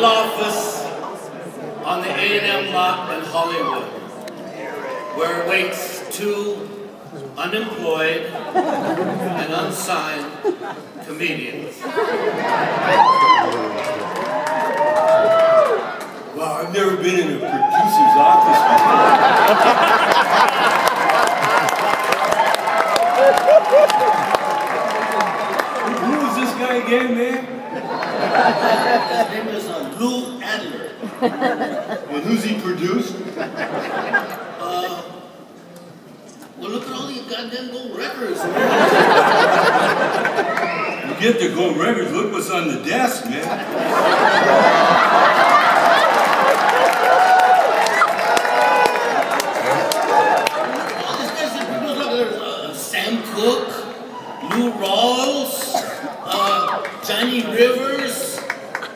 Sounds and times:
Speech: 0:00.0 - 0:01.0, 0:01.8 - 0:04.0, 0:05.2 - 0:08.4, 0:09.3 - 0:10.4, 0:11.0 - 0:11.8, 0:16.4 - 0:19.1, 0:25.9 - 0:27.5, 0:29.2 - 0:30.9, 0:32.1 - 0:33.2, 0:34.6 - 0:35.2, 0:36.6 - 0:38.6, 0:41.0 - 0:43.6, 0:51.0 - 0:58.5.

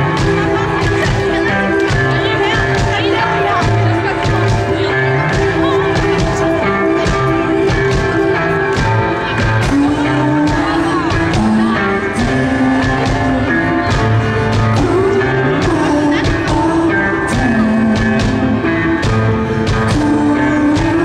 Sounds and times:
Music: 0:00.0 - 0:21.0
Speech: 0:00.0 - 0:21.0.

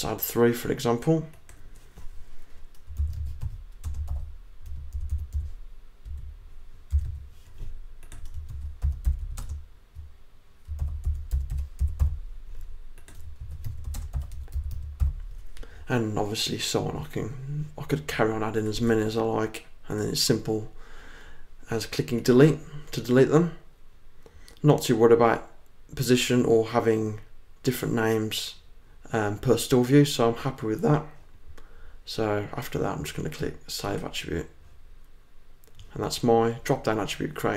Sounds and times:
Computer keyboard: 0:02.7 - 0:06.3, 0:06.9 - 0:07.2, 0:08.0 - 0:15.2.

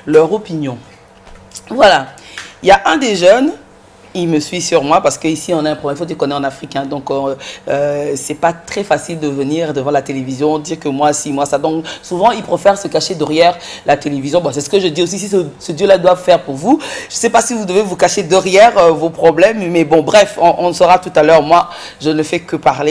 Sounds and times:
Speech: 0:00.0 - 0:00.9, 0:01.6 - 0:22.9.

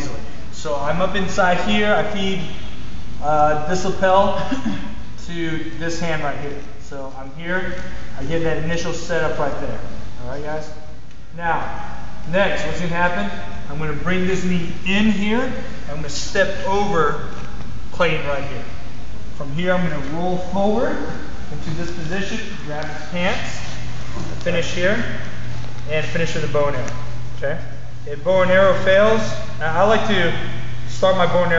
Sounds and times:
Speech: 0:00.0 - 0:02.6, 0:03.2 - 0:10.8, 0:11.4 - 0:18.8, 0:19.4 - 0:25.3, 0:25.9 - 0:31.5.

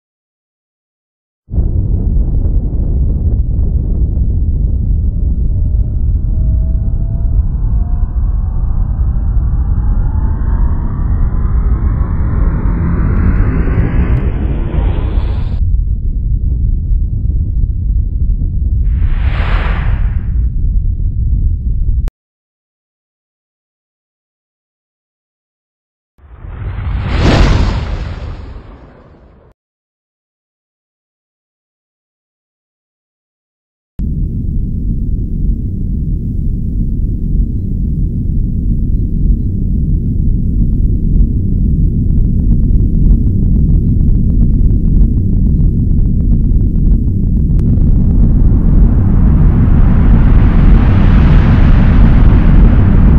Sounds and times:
Sound effect: 0:05.4 - 0:15.6, 0:18.9 - 0:20.5, 0:26.2 - 0:29.6.

